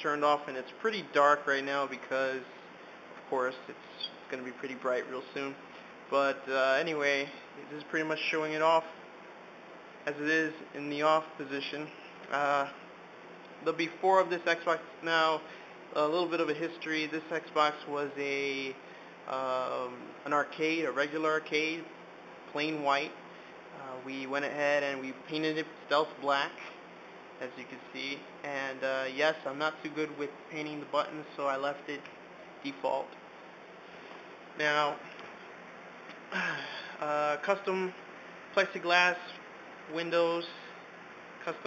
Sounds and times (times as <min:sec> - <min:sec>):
Speech: 0:00.0 - 0:02.5, 0:03.2 - 0:09.0, 0:10.1 - 0:12.8, 0:13.6 - 0:23.2, 0:23.8 - 0:26.8, 0:27.4 - 0:33.2, 0:34.6 - 0:35.1, 0:36.4 - 0:38.0, 0:38.6 - 0:40.8, 0:41.4 - 0:41.6.